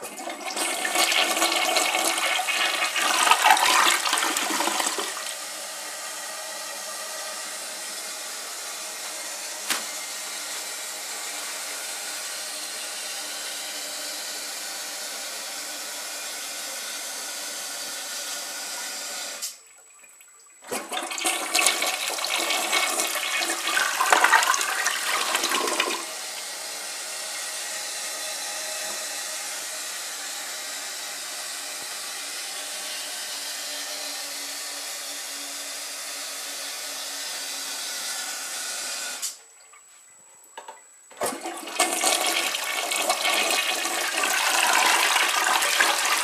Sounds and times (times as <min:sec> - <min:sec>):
Toilet flush: 0:00.0 - 0:16.7, 0:17.3 - 0:31.2, 0:41.1 - 0:46.2.